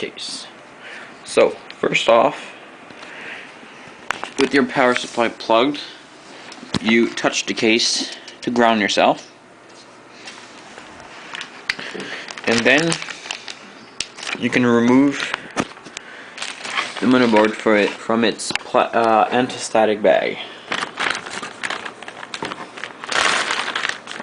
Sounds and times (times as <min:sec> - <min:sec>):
Speech: 0:00.0 - 0:00.6, 0:01.2 - 0:02.6, 0:04.4 - 0:06.0, 0:06.8 - 0:09.4, 0:12.4 - 0:13.0, 0:14.4 - 0:15.3, 0:17.0 - 0:20.5.